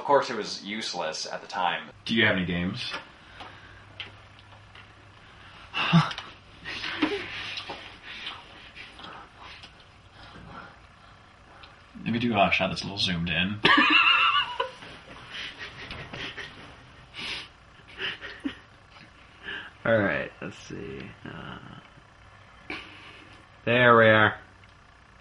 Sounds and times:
Speech: 0.0s - 3.0s, 12.0s - 13.6s.

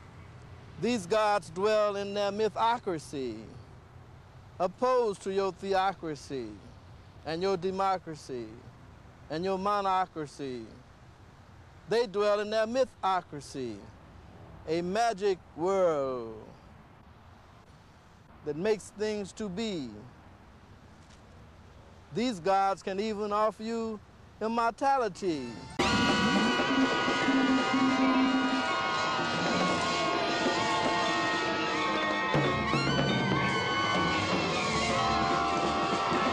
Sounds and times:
Speech: 0.8s - 3.6s, 4.6s - 6.7s, 7.3s - 8.7s, 9.3s - 10.8s, 11.9s - 14.0s, 14.7s - 16.6s, 18.5s - 20.1s, 22.1s - 25.7s.

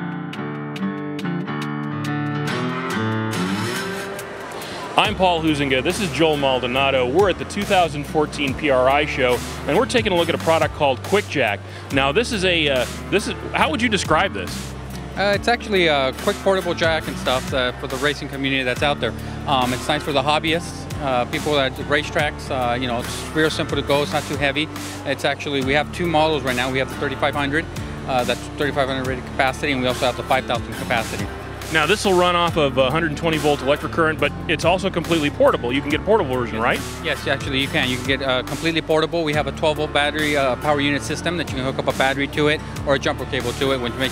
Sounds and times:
Music: 0.0s - 44.1s
Speech: 5.0s - 44.1s.

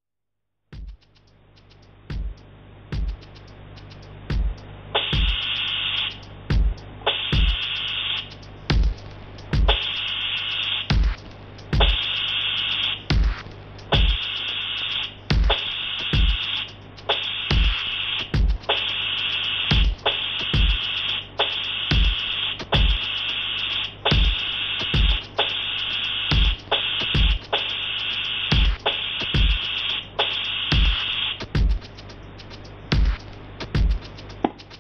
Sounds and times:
Sampler: 0.8s - 34.8s.

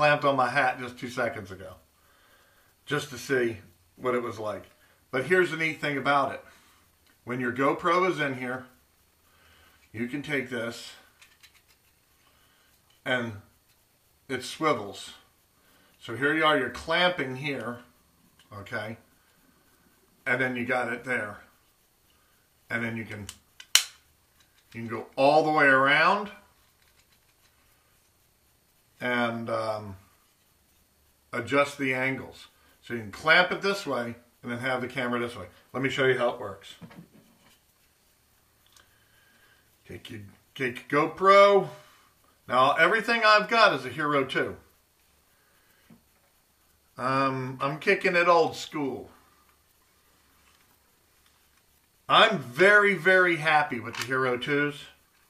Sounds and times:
Speech: 0.0s - 1.8s, 2.8s - 6.5s, 7.2s - 8.8s, 9.9s - 11.1s, 13.0s - 13.5s, 14.3s - 15.3s, 16.0s - 19.1s, 20.2s - 21.5s, 22.7s - 23.4s, 24.7s - 26.5s, 29.0s - 30.0s, 31.3s - 36.8s, 39.8s - 41.8s, 42.5s - 44.7s, 47.0s - 49.2s, 52.1s - 55.0s
Inside, small room: 0.0s - 55.2s.

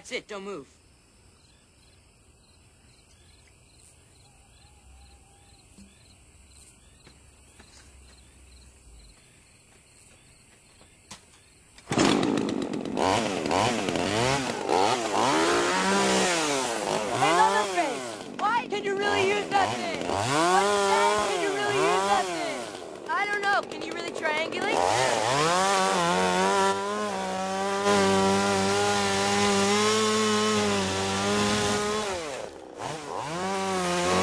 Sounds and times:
Speech: 0.0s - 0.7s, 17.2s - 20.1s, 20.8s - 24.9s
Chainsaw: 11.9s - 34.2s.

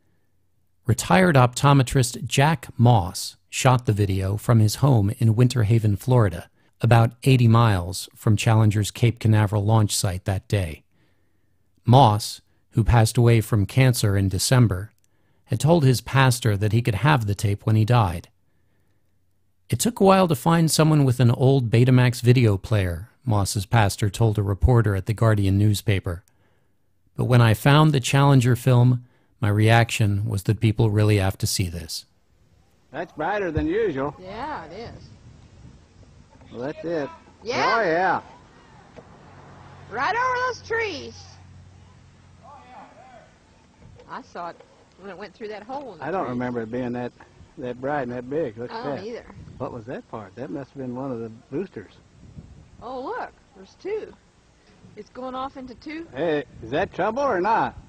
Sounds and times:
Speech: 0.9s - 10.8s, 11.8s - 14.9s, 15.5s - 18.3s, 19.7s - 26.2s, 27.2s - 32.0s, 33.0s - 35.0s, 36.5s - 38.3s, 45.0s - 52.0s, 55.0s - 57.8s.

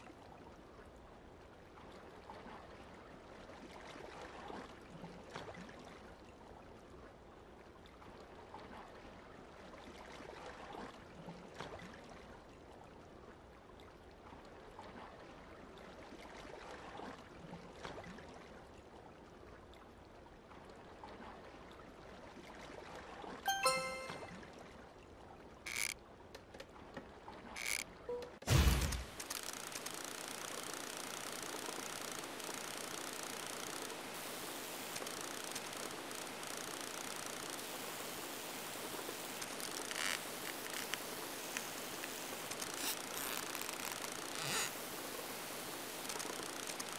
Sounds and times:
Rustle: 28.5s - 46.9s.

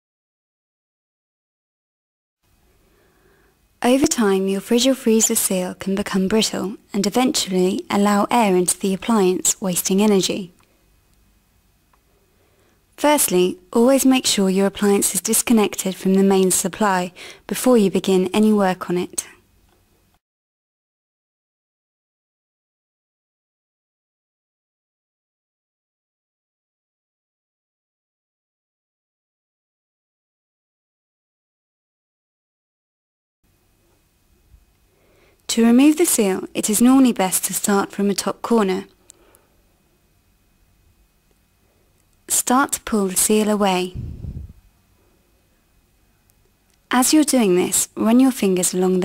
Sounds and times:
Speech: 3.8s - 10.6s, 13.0s - 19.4s, 35.5s - 39.0s, 42.3s - 44.2s, 46.9s - 49.0s.

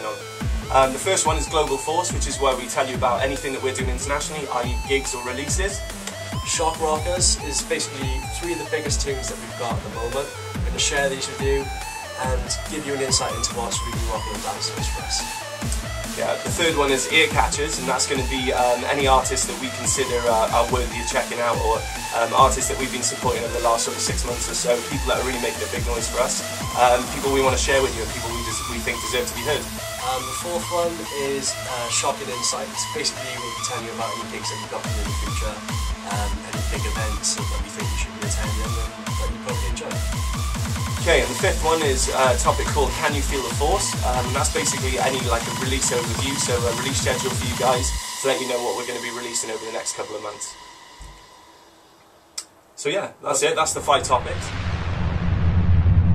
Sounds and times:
Speech: 0.0s - 5.8s, 6.4s - 15.3s, 16.2s - 40.0s, 41.0s - 50.6s, 52.8s - 54.6s
Music: 0.0s - 55.0s.

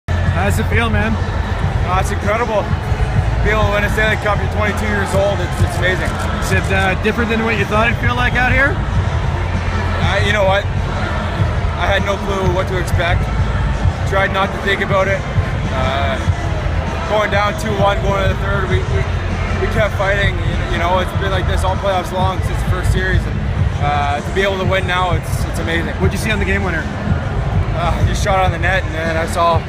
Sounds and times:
Music: 0.1s - 29.6s
Speech: 0.3s - 1.2s, 1.8s - 2.8s, 3.4s - 8.8s, 10.0s - 10.6s, 11.8s - 13.3s, 14.0s - 16.3s, 17.0s - 26.9s, 27.7s - 29.6s.

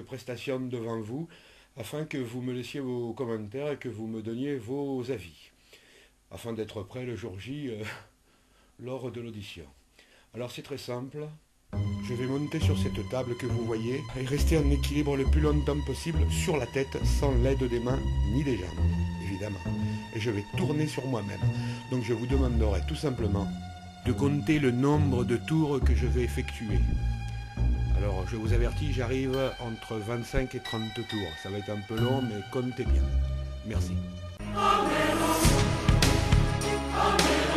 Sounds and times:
Speech: 0.0s - 5.6s, 6.3s - 8.1s, 8.8s - 11.4s, 12.0s - 23.5s, 24.1s - 26.9s, 28.0s - 34.0s
Music: 11.7s - 37.5s.

